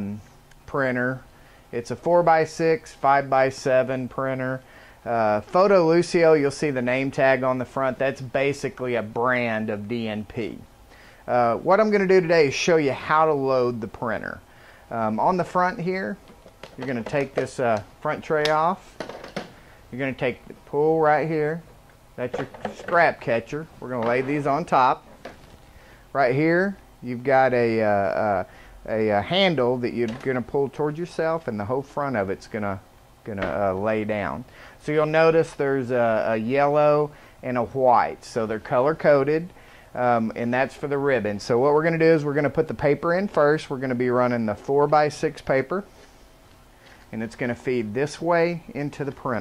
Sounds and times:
Speech: 0.0s - 1.2s, 1.8s - 10.7s, 11.3s - 16.2s, 16.8s - 18.9s, 19.9s - 25.1s, 26.1s - 45.9s, 47.1s - 49.4s.

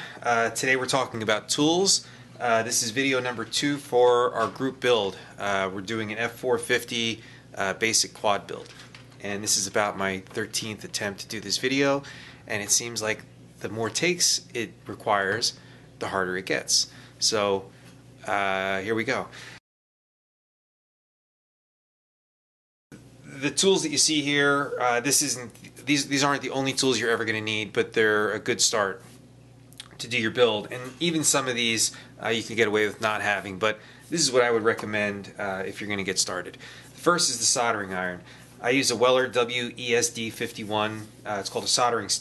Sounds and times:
Speech: 0.0s - 19.3s, 23.2s - 29.1s, 29.8s - 42.2s.

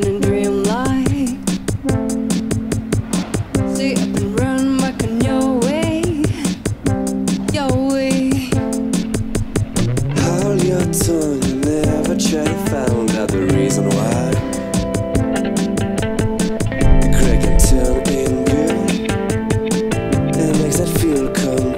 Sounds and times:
Music: 0.0s - 21.7s.

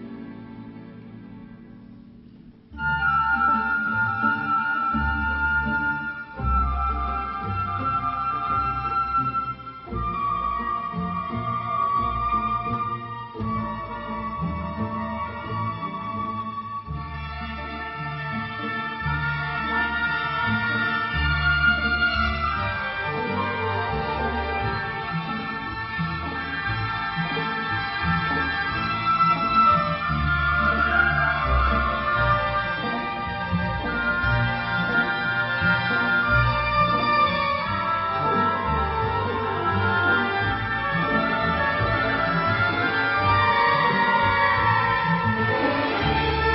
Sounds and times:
Music: 0.0s - 46.5s.

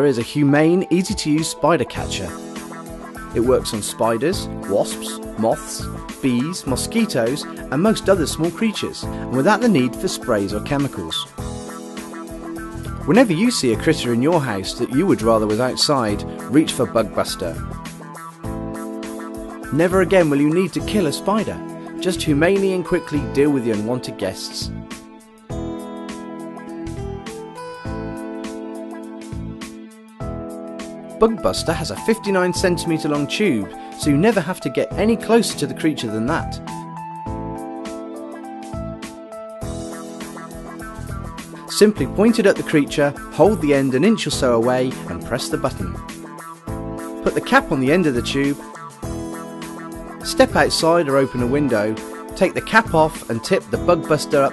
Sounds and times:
Speech: 0.0s - 2.4s, 3.4s - 11.3s, 13.1s - 17.6s, 19.7s - 24.7s, 31.2s - 36.6s, 41.7s - 46.0s, 47.2s - 48.6s, 50.2s - 54.5s
Music: 0.0s - 54.5s.

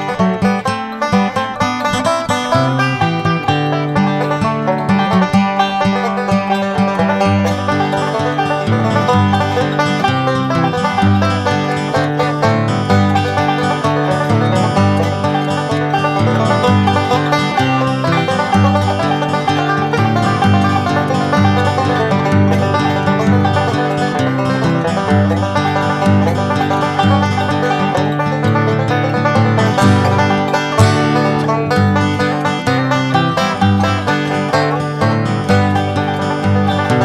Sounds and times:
Music: 0.0s - 37.0s.

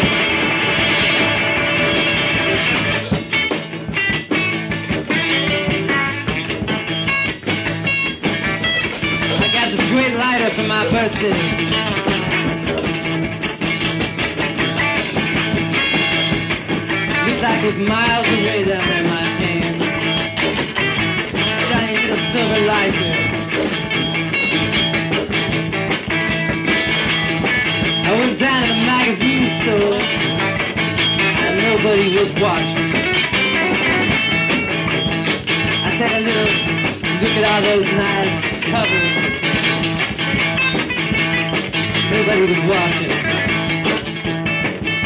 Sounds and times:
Music: 0.0s - 45.0s.

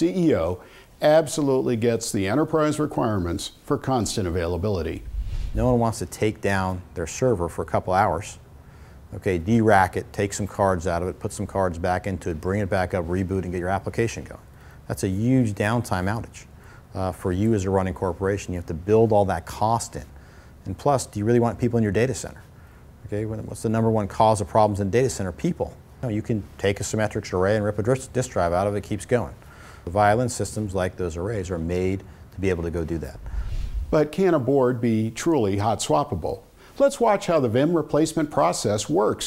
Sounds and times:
Speech: 0.0s - 5.0s, 5.6s - 8.5s, 9.1s - 33.2s, 33.9s - 39.2s.

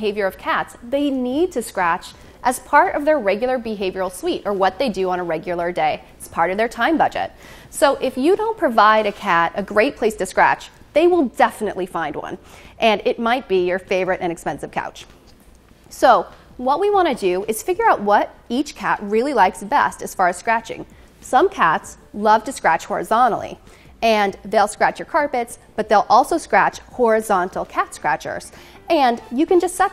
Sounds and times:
Speech: 0.0s - 15.1s, 15.9s - 29.9s.

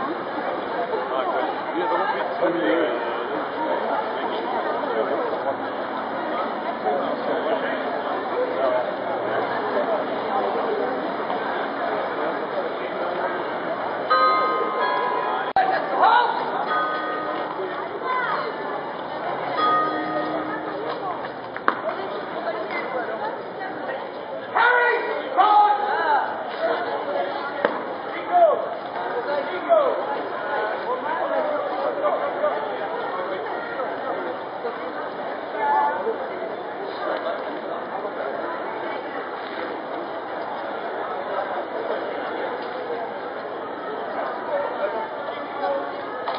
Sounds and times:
Speech: 0.0s - 46.3s.

